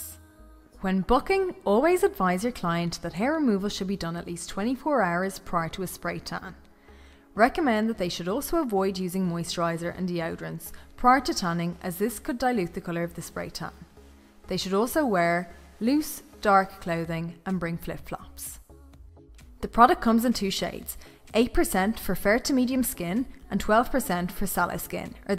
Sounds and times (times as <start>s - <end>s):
Music: 0.0s - 25.3s
Speech: 0.8s - 6.6s, 7.4s - 13.8s, 14.5s - 18.6s, 19.6s - 25.3s.